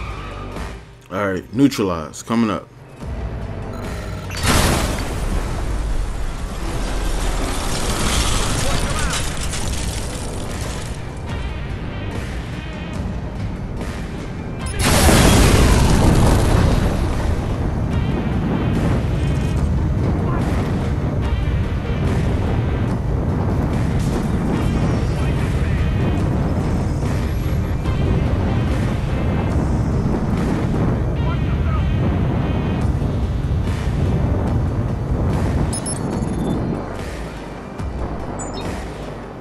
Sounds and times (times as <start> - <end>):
Music: 0.0 - 39.4
Speech: 1.1 - 2.7, 31.2 - 31.9.